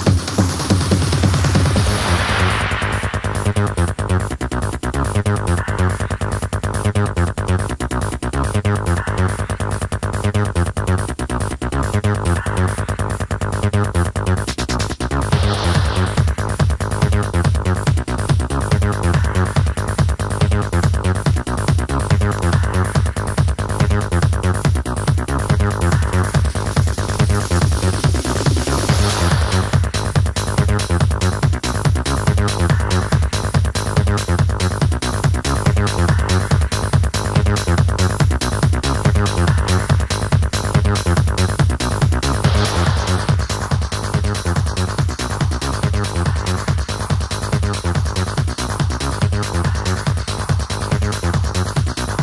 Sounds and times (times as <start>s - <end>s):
House music: 0.0s - 52.2s.